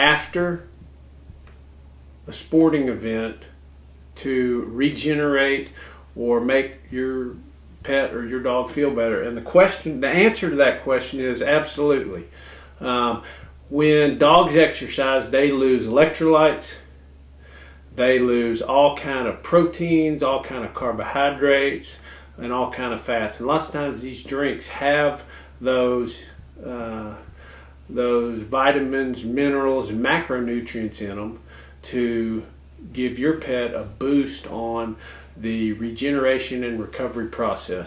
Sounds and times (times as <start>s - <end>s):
Speech: 0.0s - 0.7s, 2.3s - 3.6s, 4.2s - 16.9s, 17.9s - 27.3s, 27.9s - 37.8s.